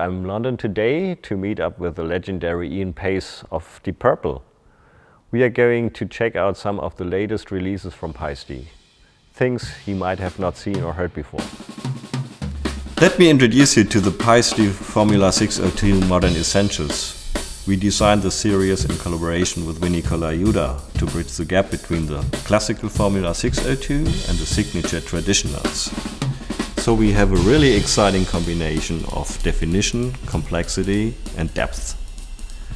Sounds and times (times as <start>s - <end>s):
Hi-hat: 12.5s - 32.7s.